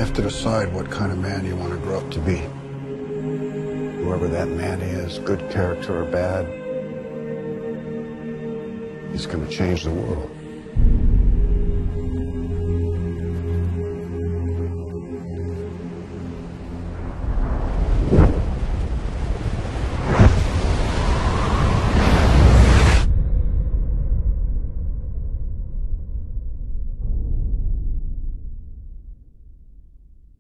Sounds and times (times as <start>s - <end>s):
Music: 0.0s - 18.4s.